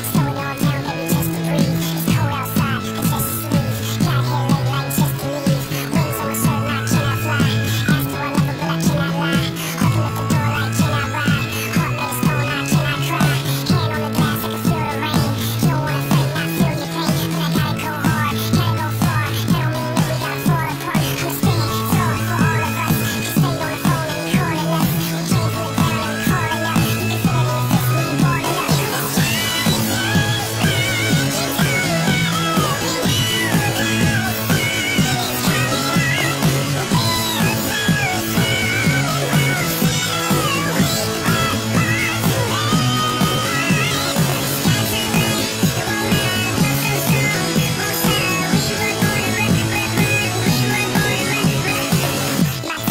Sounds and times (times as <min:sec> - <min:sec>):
Music: 0:00.0 - 0:52.9.